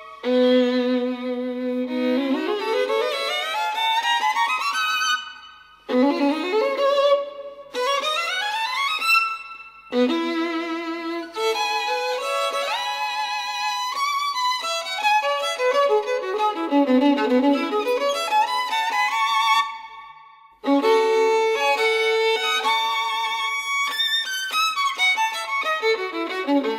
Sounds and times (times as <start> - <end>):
Violin, fiddle: 0.0 - 26.7.